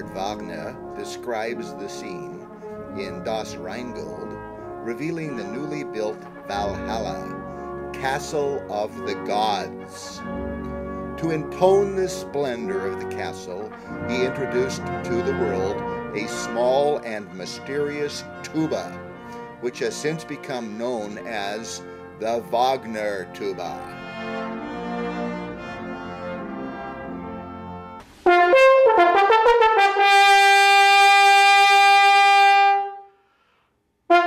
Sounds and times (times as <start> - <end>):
Speech: 0.0 - 7.4, 8.0 - 10.2, 11.2 - 19.0, 19.6 - 23.9
Music: 0.0 - 34.2.